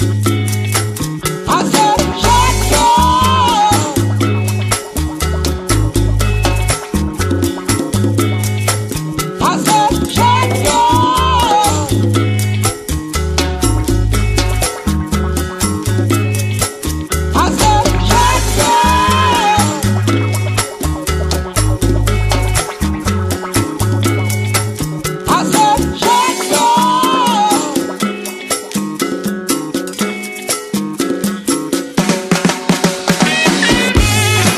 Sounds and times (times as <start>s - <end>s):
Salsa music: 0.0s - 34.5s.